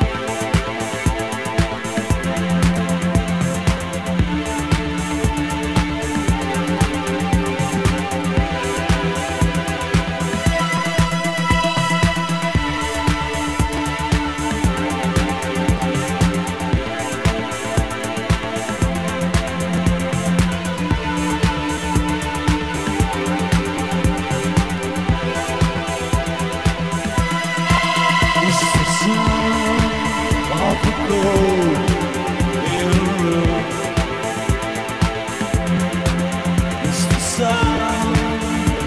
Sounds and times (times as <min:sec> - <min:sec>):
Music: 0:00.0 - 0:38.8.